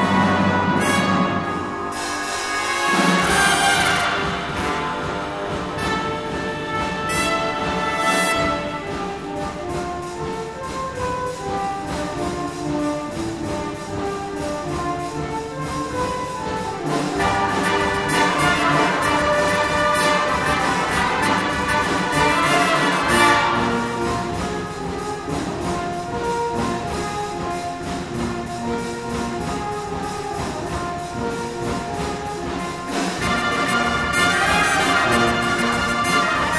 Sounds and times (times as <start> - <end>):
Music: 0.0 - 36.5.